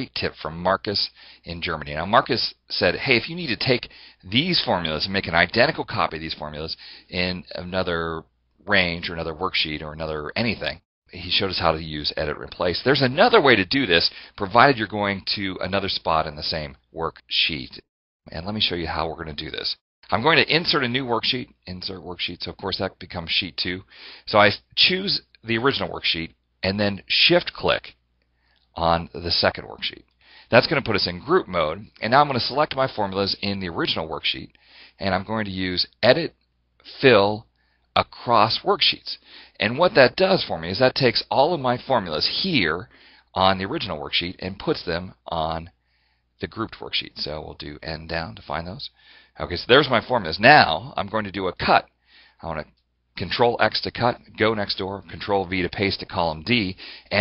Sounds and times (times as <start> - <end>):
Speech: 0.0 - 28.0, 28.8 - 45.8, 46.4 - 57.2.